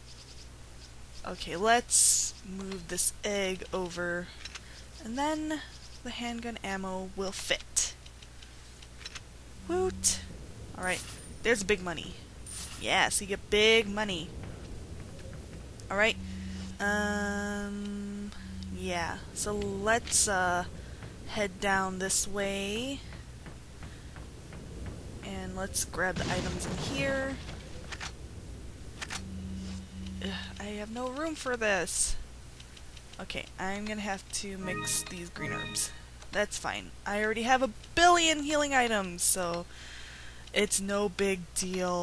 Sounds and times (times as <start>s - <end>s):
Speech: 1.2s - 4.4s, 5.0s - 8.0s, 9.6s - 12.2s, 12.8s - 14.3s, 15.9s - 16.2s, 16.8s - 20.7s, 21.3s - 23.1s, 25.2s - 27.4s, 30.2s - 32.2s, 33.2s - 39.7s, 40.5s - 42.0s.